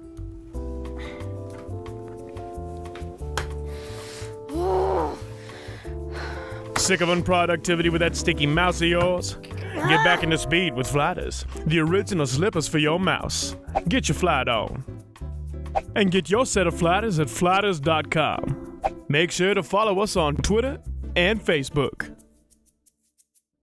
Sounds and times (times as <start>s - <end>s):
Music: 0.0s - 23.6s
Speech: 6.8s - 14.8s, 16.0s - 18.4s, 19.1s - 22.1s.